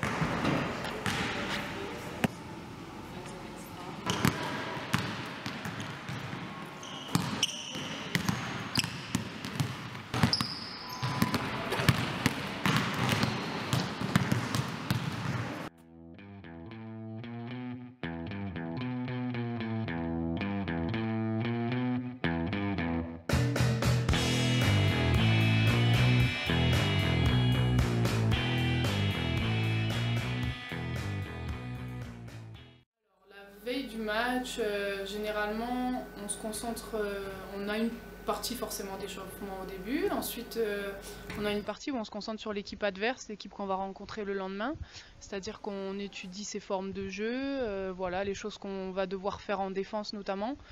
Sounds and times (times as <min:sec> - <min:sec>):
Inside, large room or hall: 0:00.0 - 0:15.7
Music: 0:15.8 - 0:32.8.